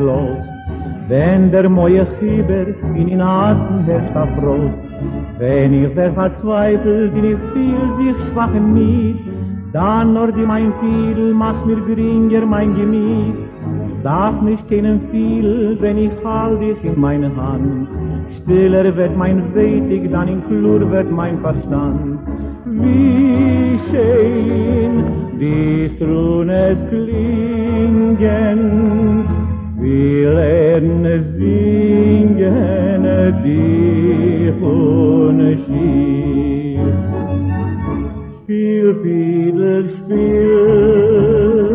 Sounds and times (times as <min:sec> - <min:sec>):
Violin, fiddle: 0:00.0 - 0:39.1.